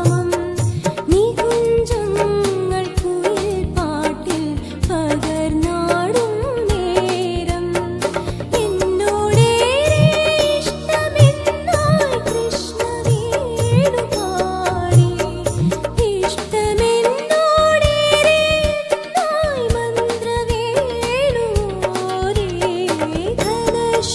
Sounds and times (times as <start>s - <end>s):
Dance music: 9.4s - 14.0s.